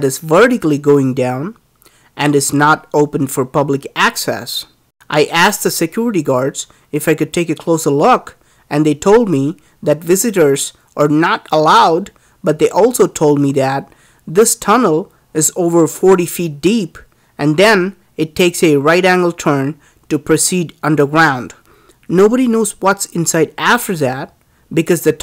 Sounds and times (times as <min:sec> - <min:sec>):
Speech: 0:00.0 - 0:01.6, 0:02.2 - 0:25.2.